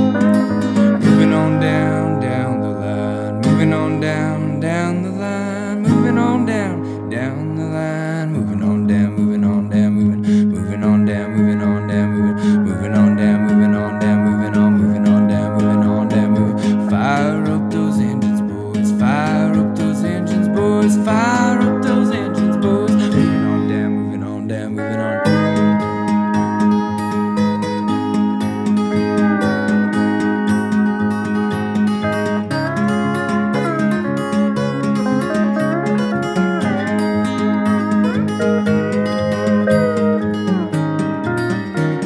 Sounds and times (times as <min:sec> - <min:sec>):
Acoustic guitar: 0:00.0 - 0:42.0.